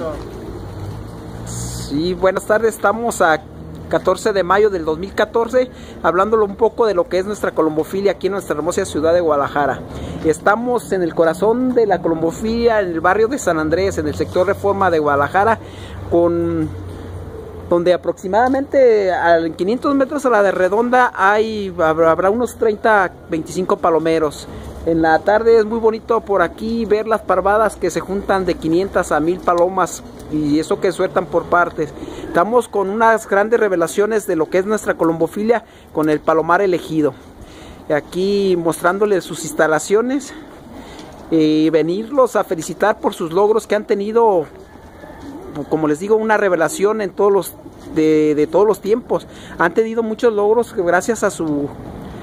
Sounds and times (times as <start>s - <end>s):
Coo: 0.0s - 1.4s, 16.7s - 17.7s, 31.8s - 33.2s, 44.4s - 49.5s.